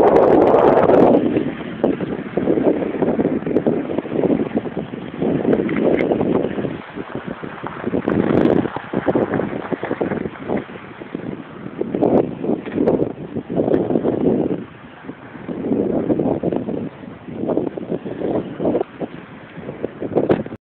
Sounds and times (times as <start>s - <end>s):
Wind noise (microphone): 0.0s - 20.6s.